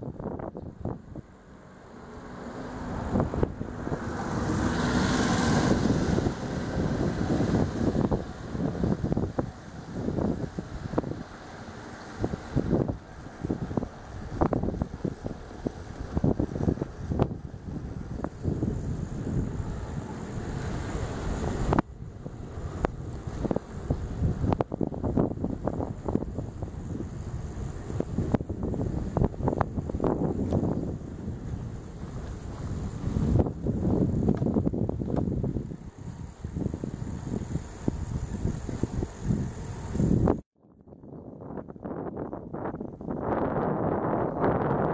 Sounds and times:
Bicycle: 0:00.0 - 0:44.9.

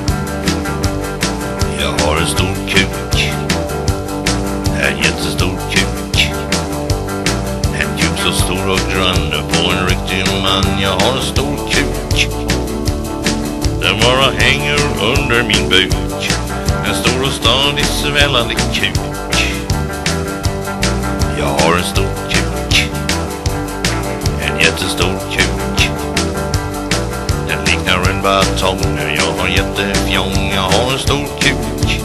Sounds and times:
Happy music: 0:00.0 - 0:32.0.

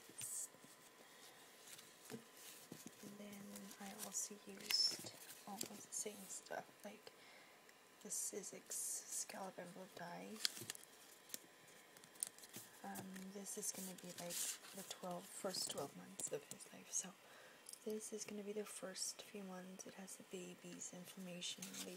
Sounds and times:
Inside, small room: 0:00.0 - 0:21.9
Speech: 0:03.0 - 0:07.1, 0:08.0 - 0:10.4, 0:12.8 - 0:17.2, 0:17.9 - 0:21.9.

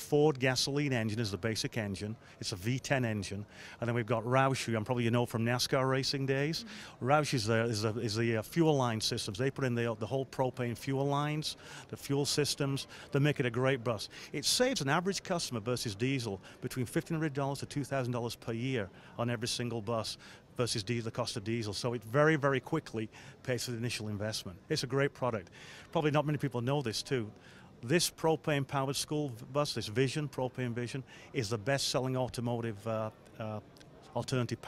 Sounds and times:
Speech: 0:00.0 - 0:34.6.

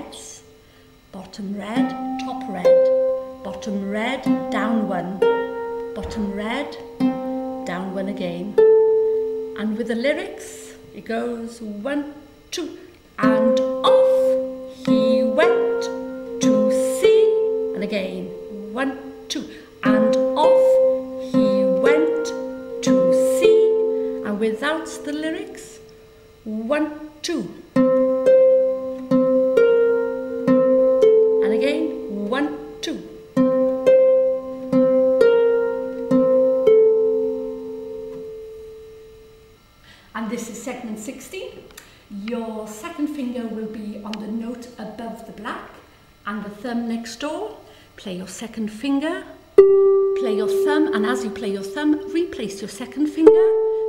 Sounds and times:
Speech: 0:00.0 - 0:00.5, 0:01.1 - 0:02.8, 0:03.4 - 0:05.2, 0:06.0 - 0:06.8, 0:07.7 - 0:08.6, 0:09.6 - 0:25.8, 0:26.4 - 0:27.7, 0:31.4 - 0:33.2, 0:40.2 - 0:49.4, 0:50.2 - 0:53.6
Music: 0:01.7 - 0:11.0, 0:13.2 - 0:26.4, 0:27.7 - 0:39.6, 0:49.5 - 0:53.8.

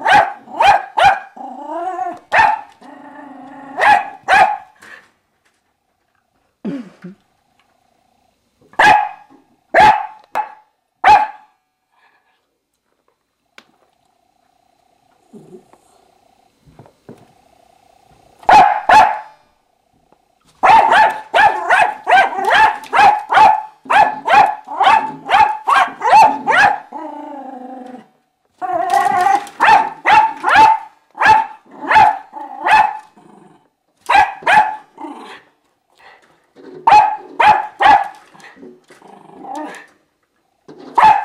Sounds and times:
Bark: 0:00.0 - 0:01.3, 0:02.3 - 0:02.7, 0:03.8 - 0:04.8, 0:08.8 - 0:11.6, 0:18.5 - 0:19.4, 0:20.6 - 0:26.9, 0:29.6 - 0:33.1, 0:34.1 - 0:34.9, 0:36.8 - 0:38.2, 0:41.0 - 0:41.2.

